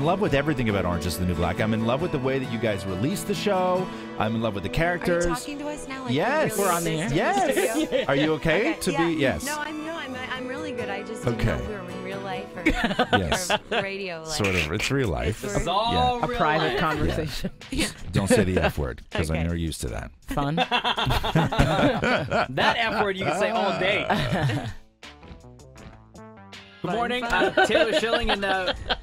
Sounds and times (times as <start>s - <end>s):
Speech: 0.0s - 20.6s, 22.5s - 24.3s, 26.9s - 28.8s
Music: 0.0s - 29.0s.